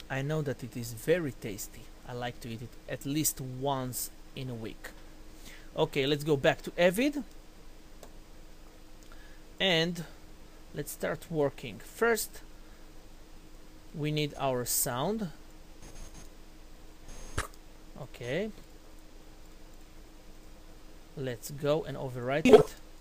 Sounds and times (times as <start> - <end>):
Speech: 0.1 - 4.9, 5.8 - 7.3, 9.6 - 10.2, 10.8 - 12.4, 14.0 - 15.4, 18.0 - 18.6, 21.2 - 22.8.